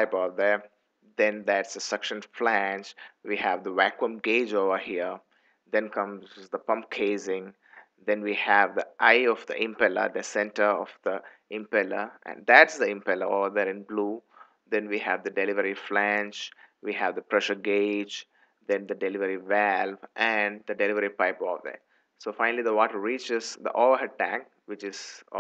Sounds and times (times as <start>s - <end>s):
Speech: 0.0s - 5.2s, 5.8s - 25.4s.